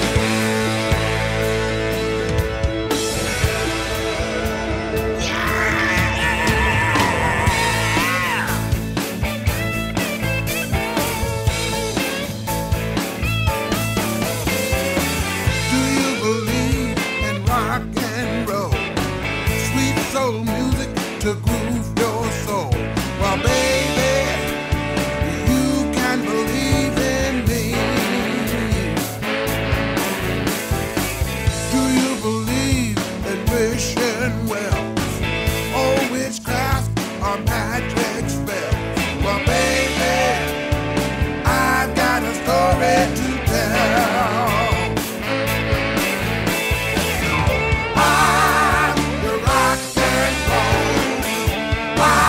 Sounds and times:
Rock and roll: 0:00.0 - 0:52.2.

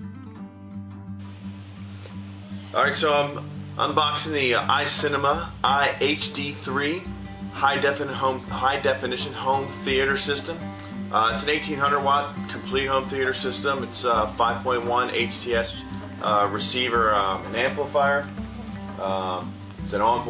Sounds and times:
Music: 0:00.0 - 0:20.2
Speech: 0:02.8 - 0:10.6, 0:11.2 - 0:18.4, 0:19.0 - 0:20.2.

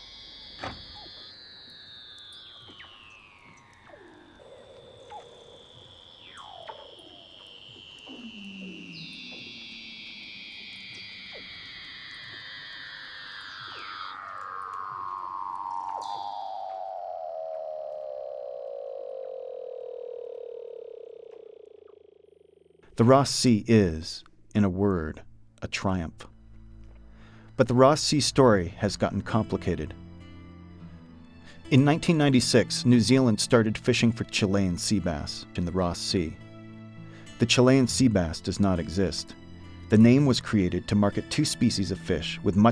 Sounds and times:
Speech: 0:23.0 - 0:26.3, 0:27.6 - 0:30.0, 0:31.7 - 0:36.4, 0:37.4 - 0:42.7.

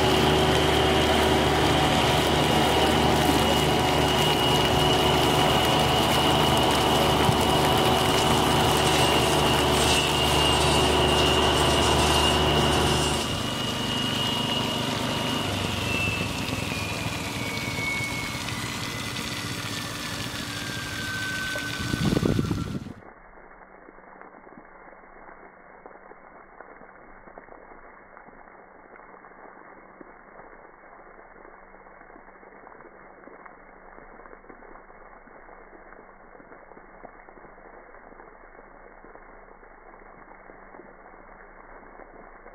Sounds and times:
Water: 0:00.0 - 0:42.5.

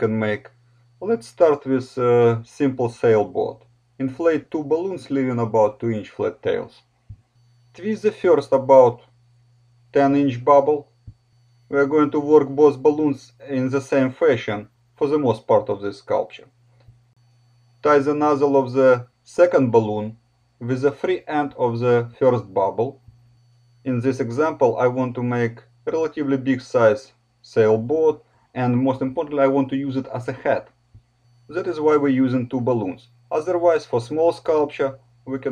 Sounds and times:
Speech: 0:00.0 - 0:06.8, 0:07.8 - 0:09.1, 0:09.9 - 0:10.9, 0:11.7 - 0:16.5, 0:17.8 - 0:23.0, 0:23.9 - 0:30.7, 0:31.5 - 0:35.5.

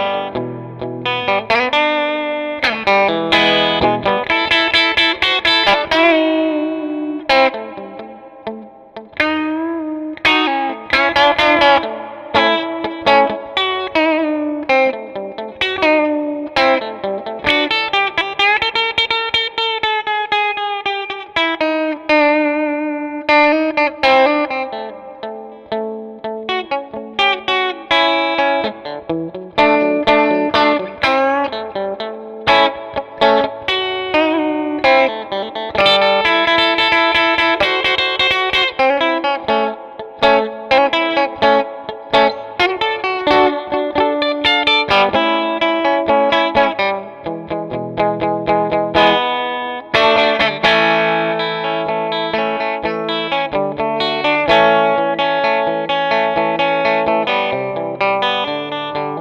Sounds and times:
Music: 0:00.0 - 0:59.2.

